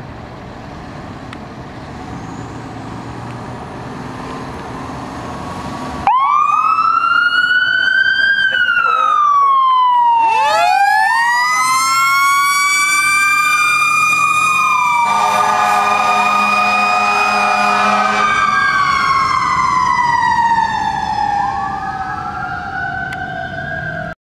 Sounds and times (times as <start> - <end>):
Truck: 0.0 - 24.2
Fire engine, fire truck (siren): 5.4 - 24.2.